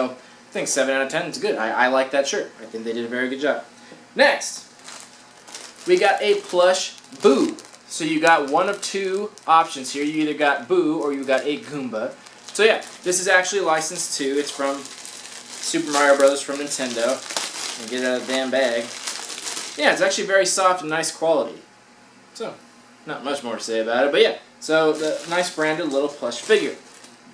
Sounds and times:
Speech: 0.0s - 4.7s, 5.8s - 14.9s, 15.6s - 17.2s, 17.8s - 18.9s, 19.8s - 21.7s, 22.4s - 26.8s.

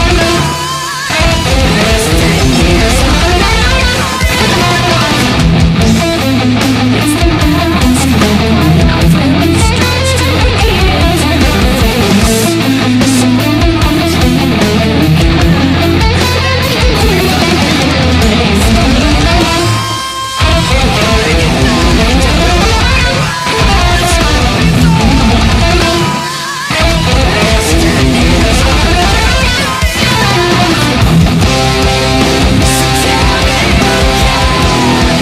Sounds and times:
Guitar: 0.0s - 35.2s
Heavy metal: 0.0s - 35.2s.

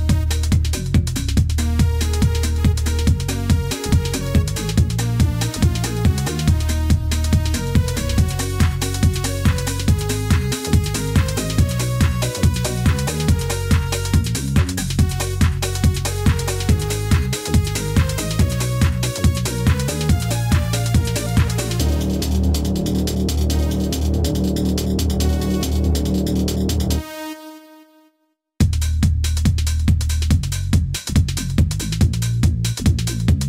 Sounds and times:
Music: 0.0s - 33.4s.

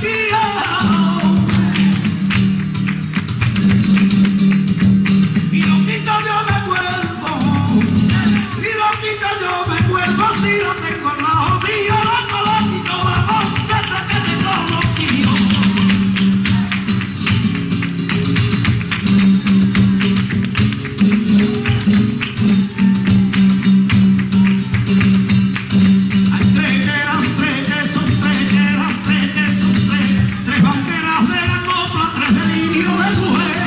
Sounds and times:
Acoustic guitar: 0.0s - 33.6s
Flamenco: 0.0s - 33.6s
Singing: 26.4s - 33.6s.

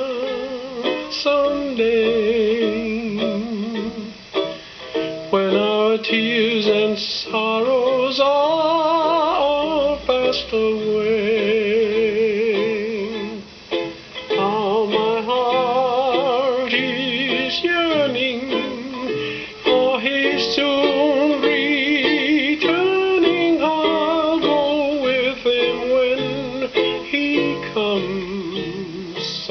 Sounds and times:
Ukulele: 0.0s - 29.5s.

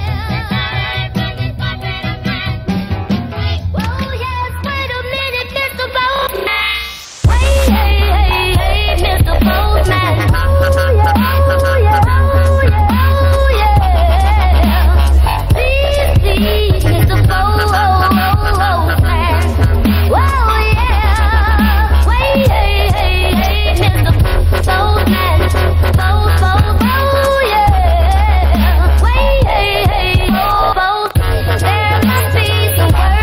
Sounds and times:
Dubstep: 3.8s - 33.2s.

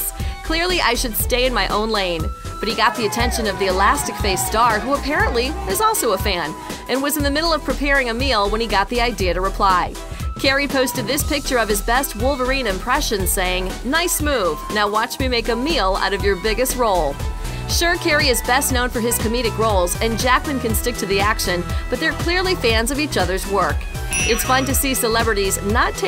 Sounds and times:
Music: 0.0s - 26.0s
Speech: 0.0s - 26.0s.

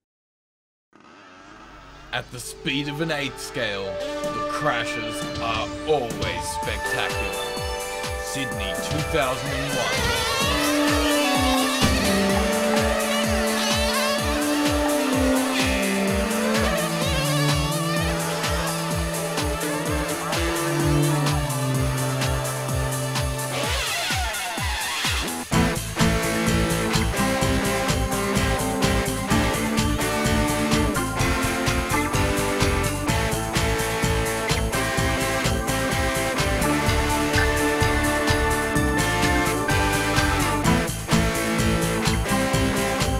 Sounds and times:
Music: 1.9s - 43.1s.

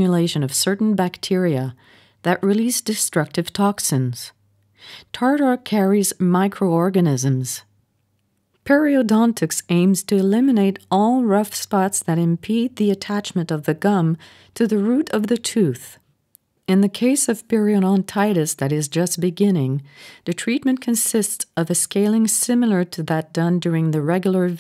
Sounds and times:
Speech: 0.0s - 4.4s, 5.1s - 7.7s, 8.6s - 16.0s, 16.7s - 24.6s.

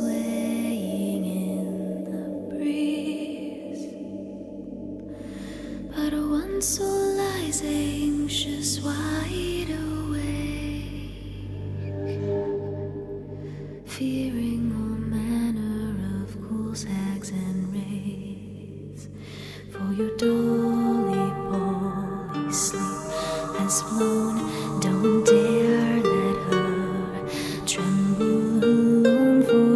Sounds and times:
Lullaby: 0.0s - 29.7s.

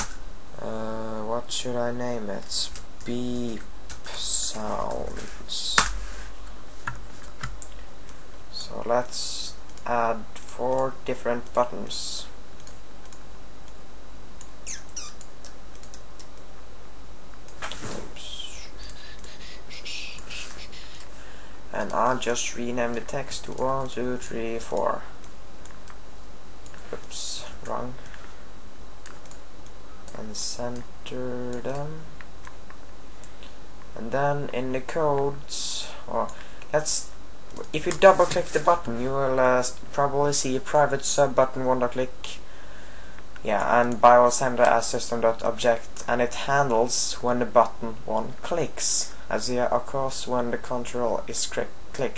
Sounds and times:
Speech: 0.6s - 5.9s, 8.5s - 12.4s, 17.7s - 18.8s, 21.7s - 25.2s, 26.9s - 28.0s, 30.1s - 32.1s, 34.0s - 42.5s, 43.4s - 52.1s.

